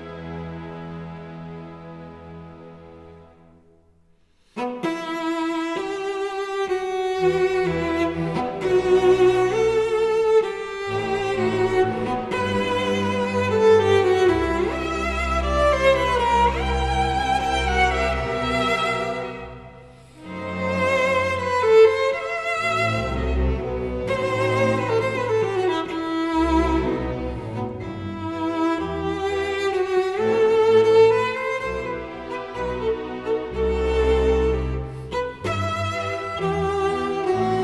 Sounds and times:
Cello: 0.0s - 37.6s.

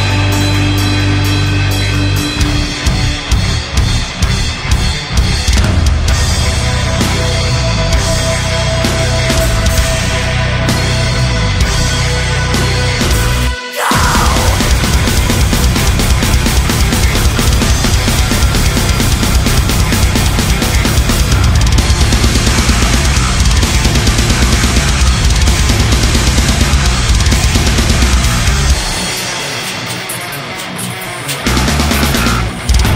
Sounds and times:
Music: 0.0s - 32.9s.

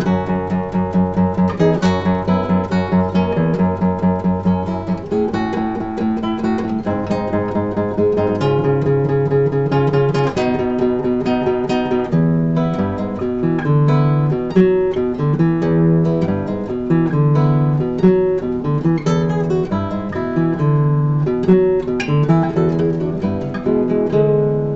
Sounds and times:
Acoustic guitar: 0.0s - 24.7s
Strum: 0.0s - 24.7s.

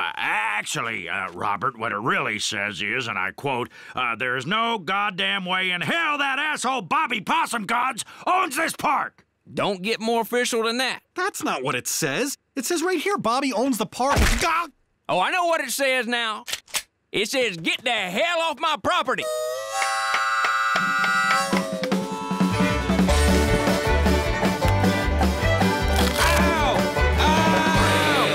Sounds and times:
Speech: 0.0s - 16.5s, 17.1s - 19.3s
Music: 19.2s - 28.3s.

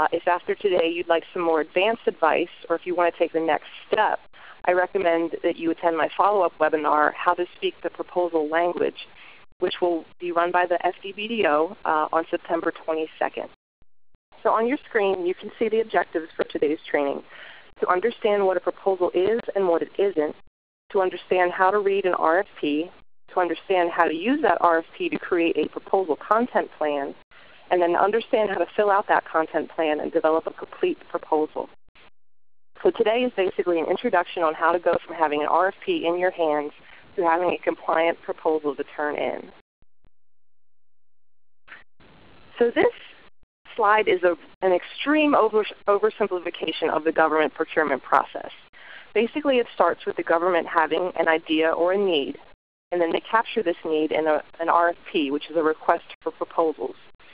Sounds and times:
Speech: 0.0s - 13.6s, 14.4s - 31.7s, 32.8s - 39.5s, 42.5s - 57.0s.

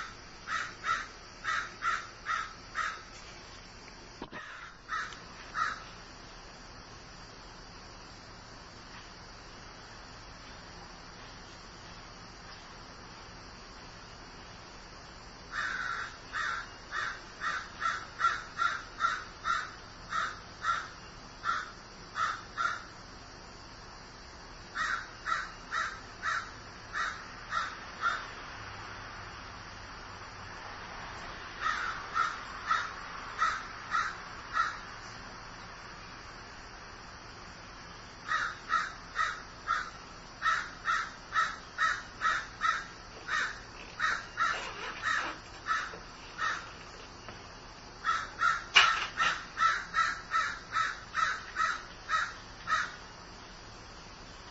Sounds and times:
Caw: 0.0s - 3.1s, 4.2s - 5.9s, 15.5s - 22.9s, 24.8s - 28.3s, 31.6s - 34.8s, 38.3s - 46.8s, 48.0s - 53.0s.

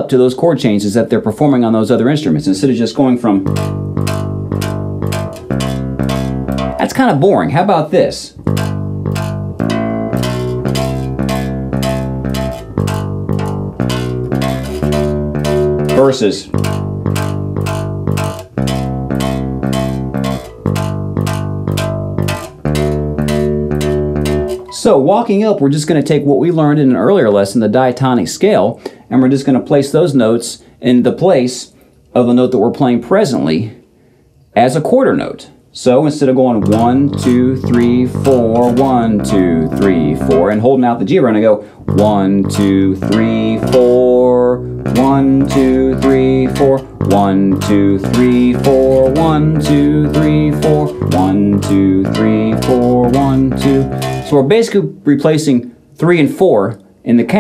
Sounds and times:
Speech: 0.0s - 3.5s, 6.8s - 8.4s, 15.9s - 16.6s, 24.7s - 33.8s, 34.6s - 57.4s
Bass guitar: 3.2s - 25.1s, 36.5s - 55.0s.

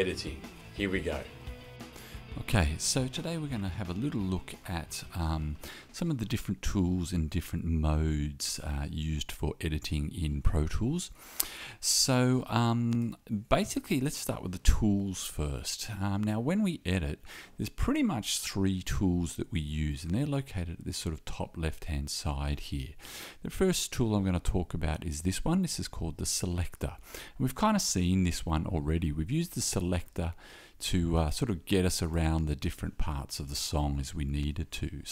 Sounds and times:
Speech: 0.0s - 1.4s, 2.3s - 11.2s, 11.8s - 35.1s.

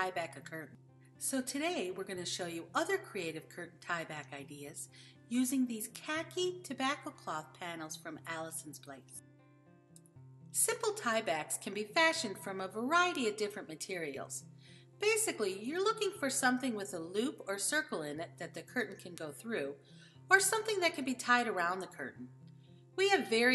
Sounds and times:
Speech: 0.0s - 9.2s, 10.6s - 14.4s, 15.0s - 22.3s, 23.0s - 23.5s.

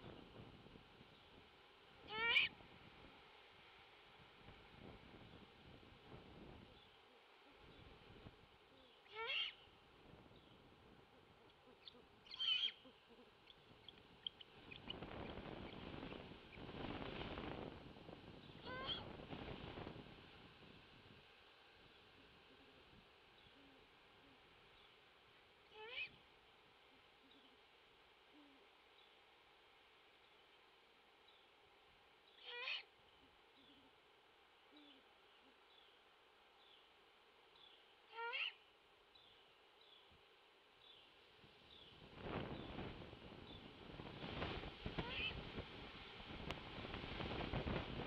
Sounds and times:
Owl: 2.1s - 2.6s, 8.7s - 9.7s, 11.2s - 15.9s, 18.6s - 19.1s, 25.7s - 26.2s, 32.3s - 32.9s, 34.7s - 35.6s, 38.1s - 38.7s, 45.0s - 45.4s.

